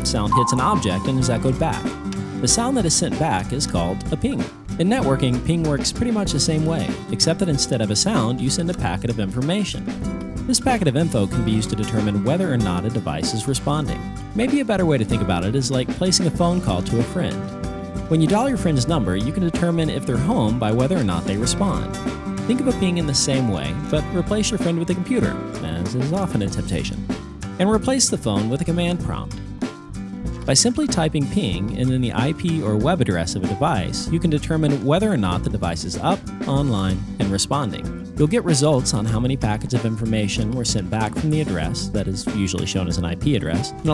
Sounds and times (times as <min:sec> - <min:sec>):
Speech: 0:00.0 - 0:09.9, 0:10.5 - 0:17.4, 0:18.1 - 0:27.0, 0:27.6 - 0:29.4, 0:30.5 - 0:43.9
Music: 0:00.0 - 0:43.9.